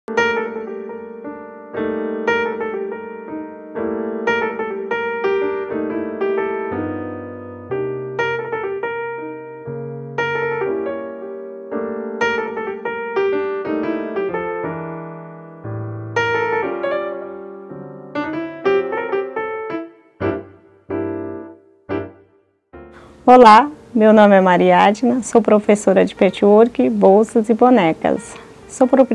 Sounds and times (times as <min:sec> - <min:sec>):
Music: 0:00.1 - 0:29.1.